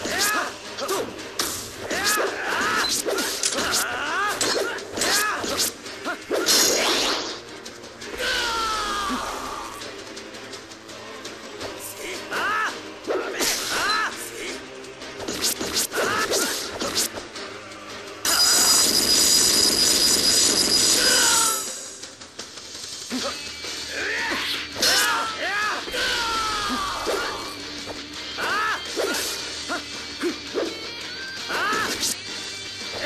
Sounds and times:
Music: 0.0s - 33.0s.

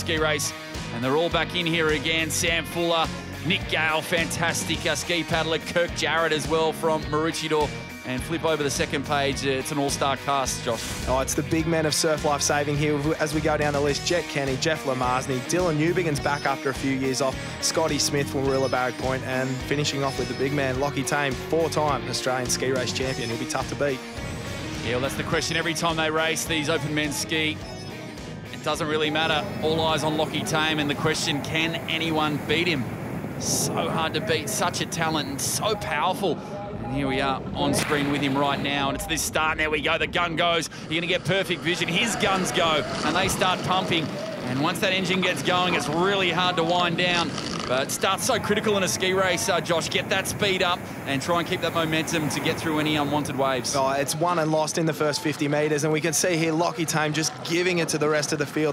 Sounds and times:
Waves, surf: 28.6s - 36.4s, 37.0s - 39.5s, 40.5s - 54.6s
Wind noise (microphone): 29.1s - 53.4s.

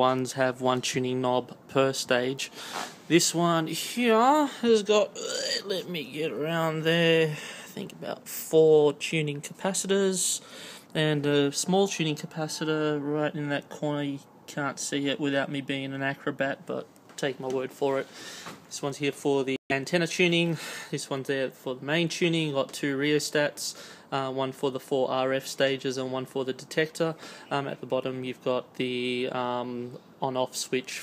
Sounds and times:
Speech: 0.0s - 2.5s, 3.1s - 18.1s, 18.7s - 31.0s.

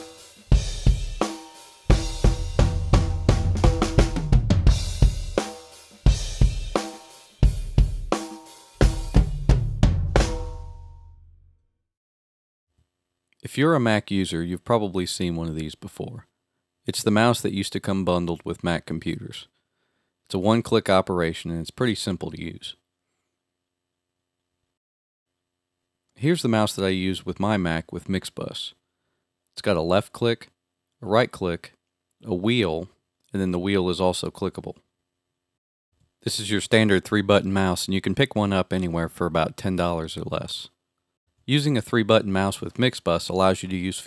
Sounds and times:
Speech: 13.4s - 16.3s, 16.9s - 19.5s, 20.3s - 22.8s, 26.2s - 28.8s, 29.6s - 34.8s, 36.2s - 40.8s, 41.5s - 44.0s.

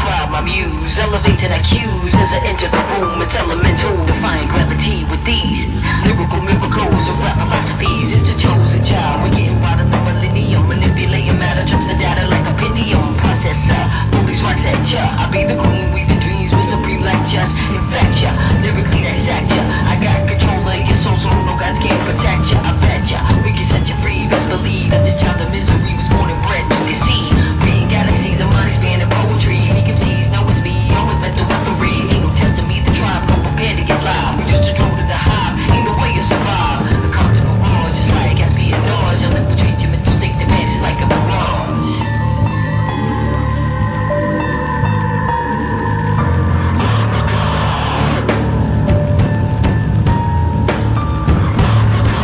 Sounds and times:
Music: 0.0s - 52.2s.

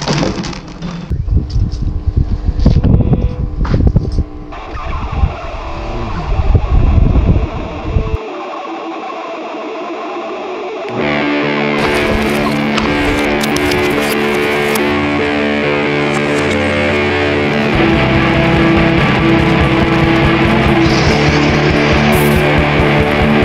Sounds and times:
Music: 4.2s - 23.4s.

